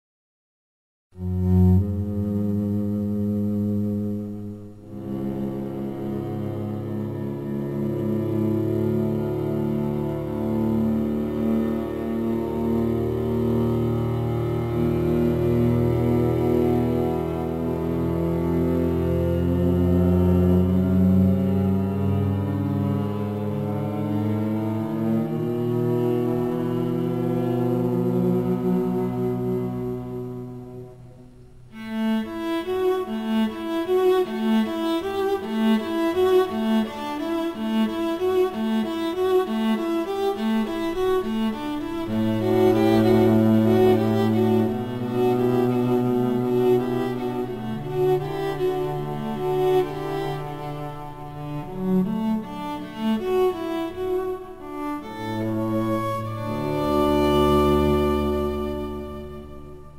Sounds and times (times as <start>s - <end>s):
Bowed string instrument: 1.1s - 59.9s.